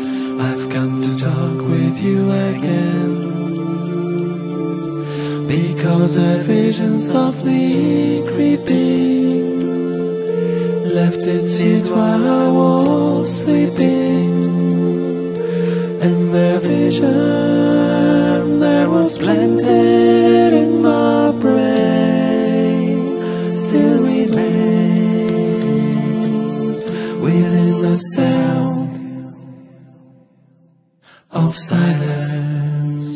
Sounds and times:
Music: 0:00.0 - 0:33.1.

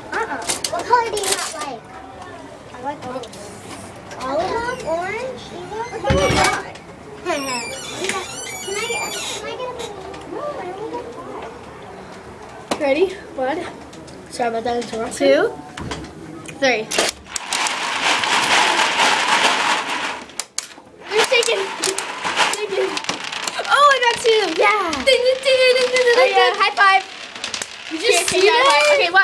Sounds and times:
Children playing: 0:00.0 - 0:15.7, 0:21.0 - 0:29.2.

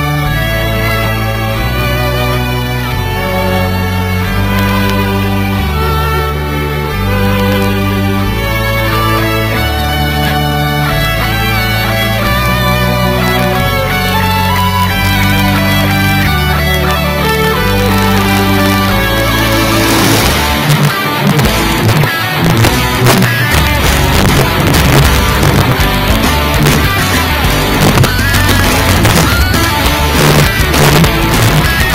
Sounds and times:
Music: 0:00.0 - 0:31.9.

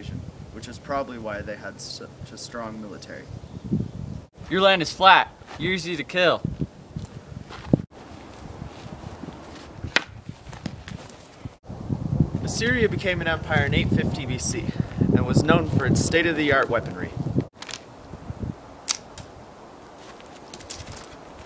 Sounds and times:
Speech: 0:00.0 - 0:03.3, 0:04.5 - 0:06.4, 0:12.4 - 0:17.2.

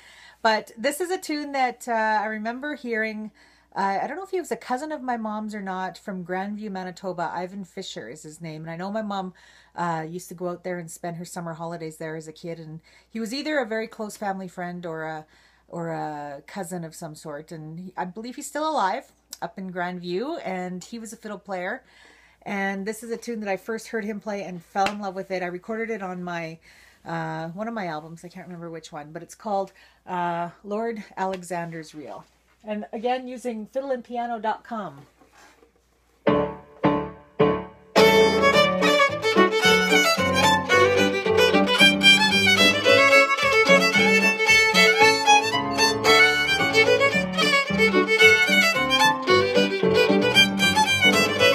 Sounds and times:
Speech: 0:00.4 - 0:21.8, 0:22.5 - 0:35.1.

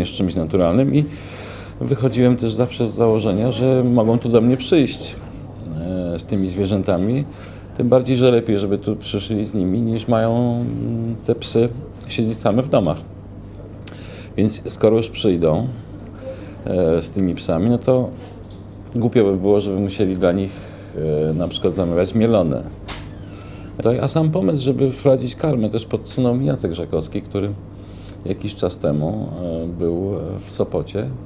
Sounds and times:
Speech: 0:00.0 - 0:01.1, 0:01.8 - 0:13.1, 0:14.4 - 0:15.8, 0:16.6 - 0:18.3, 0:18.9 - 0:22.8, 0:23.8 - 0:27.6, 0:28.2 - 0:31.2.

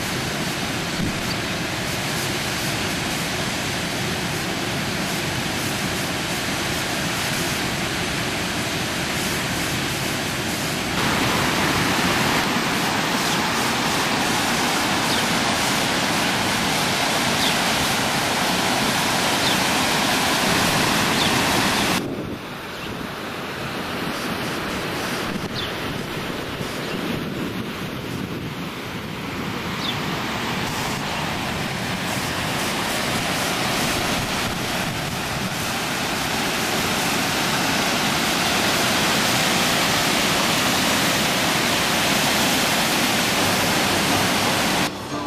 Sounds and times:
Outside, rural or natural: 0:00.0 - 0:45.2.

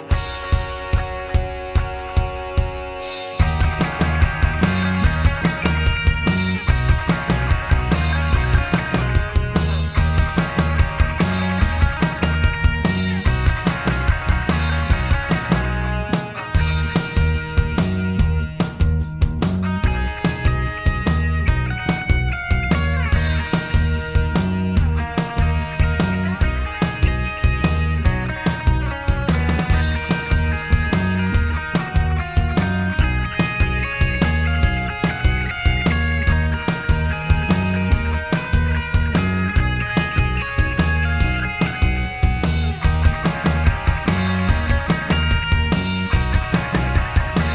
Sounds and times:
Grunge: 0:00.0 - 0:47.5.

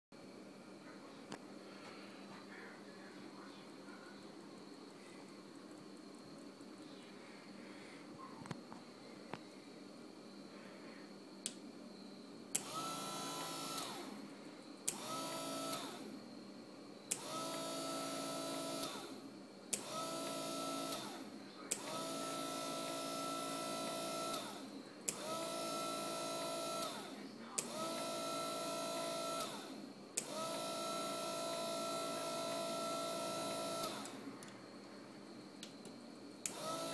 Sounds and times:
Speech: 0:02.3 - 0:04.4, 0:27.1 - 0:27.8.

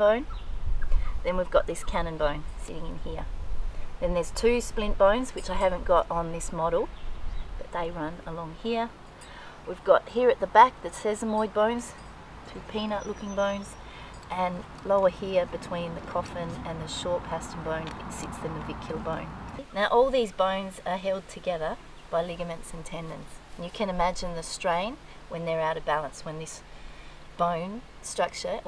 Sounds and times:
Speech: 0:00.0 - 0:00.3, 0:01.2 - 0:03.3, 0:04.0 - 0:06.9, 0:07.6 - 0:09.0, 0:09.7 - 0:26.6, 0:27.4 - 0:28.6.

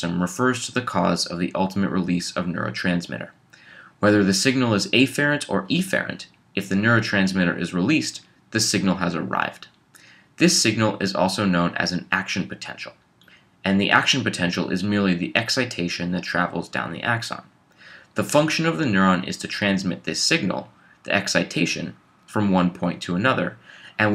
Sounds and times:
Speech: 0:00.0 - 0:09.8, 0:10.4 - 0:13.0, 0:13.6 - 0:17.5, 0:18.1 - 0:24.1.

